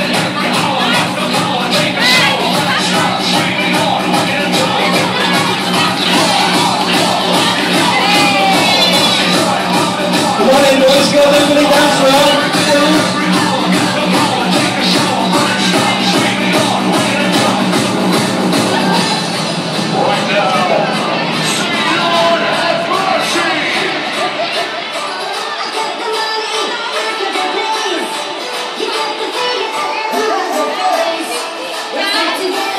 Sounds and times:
Speech: 0.0s - 17.6s, 18.6s - 24.4s
Music: 0.0s - 32.7s.

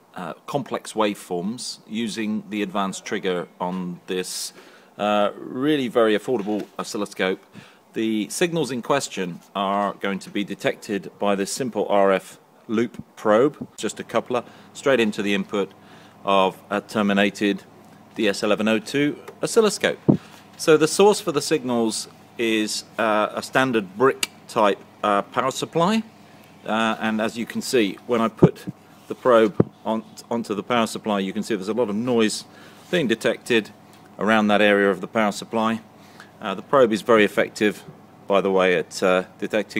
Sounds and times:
Speech: 0.1s - 7.4s, 8.0s - 26.1s, 26.7s - 39.7s.

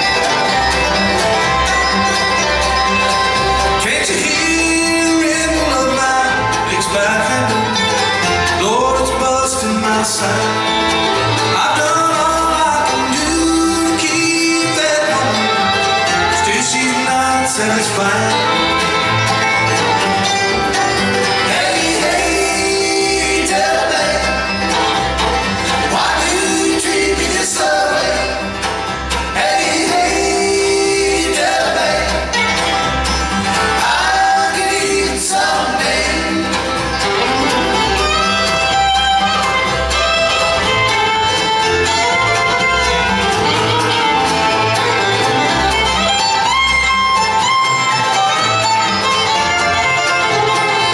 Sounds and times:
Bluegrass: 0.0s - 50.9s.

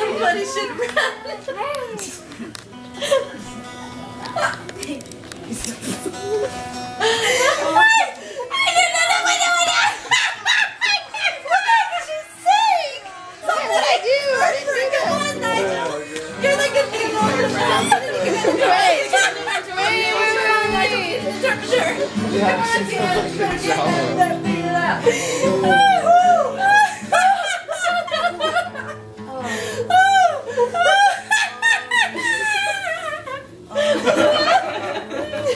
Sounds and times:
Music: 0.0s - 35.5s
Snicker: 0.6s - 3.6s, 5.5s - 12.3s, 17.6s - 20.2s, 25.2s - 29.2s, 29.9s - 35.5s.

